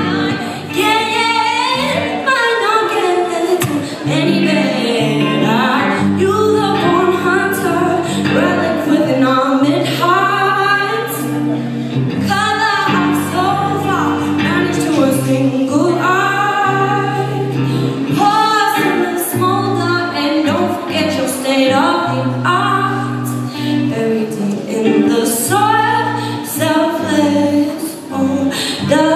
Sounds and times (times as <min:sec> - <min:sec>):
Music: 0:00.0 - 0:29.1.